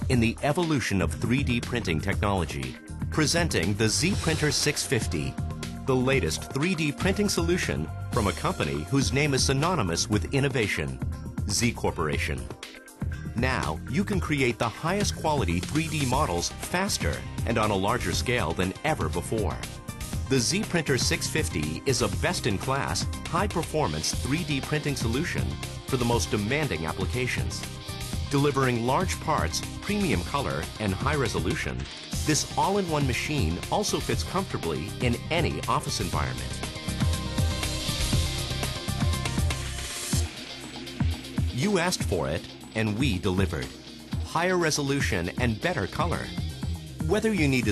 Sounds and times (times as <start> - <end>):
Speech: 0.0 - 5.3, 5.9 - 12.5, 13.4 - 19.6, 20.3 - 27.6, 28.3 - 36.5, 41.6 - 46.4, 47.0 - 47.7
Music: 0.0 - 47.7.